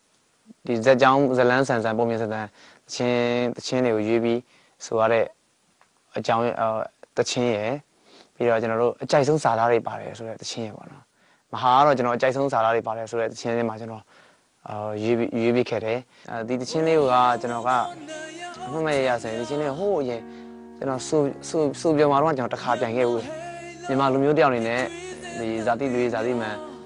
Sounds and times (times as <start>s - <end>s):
Speech: 0.5s - 5.4s, 6.1s - 17.9s, 18.7s - 20.2s, 20.8s - 23.3s, 23.9s - 26.6s
Music: 16.6s - 26.8s.